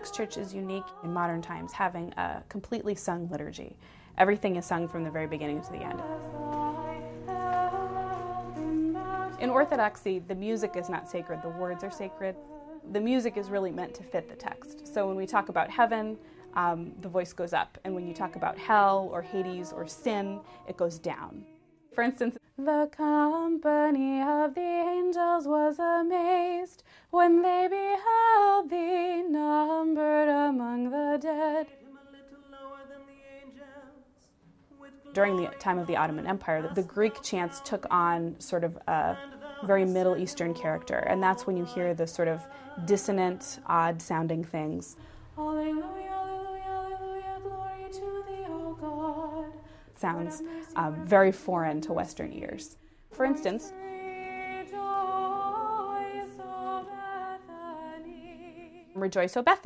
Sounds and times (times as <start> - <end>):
Speech: 0.0 - 6.0, 9.4 - 22.4, 35.1 - 45.0, 50.0 - 53.7, 59.0 - 59.6.